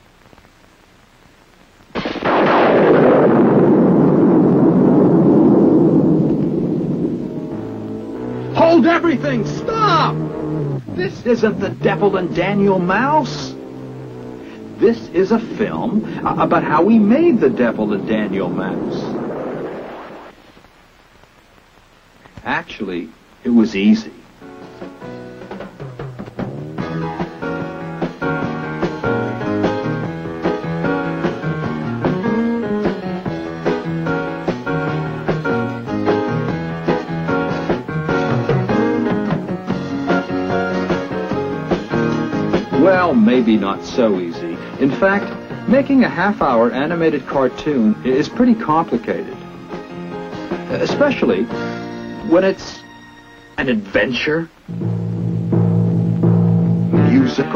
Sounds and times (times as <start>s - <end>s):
Music: 7.0s - 19.2s, 23.4s - 57.5s.